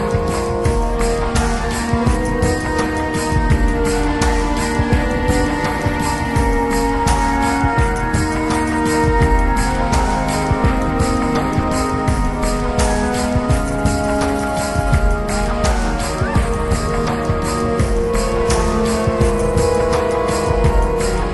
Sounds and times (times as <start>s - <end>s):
Rhythm and blues: 0.0s - 21.3s.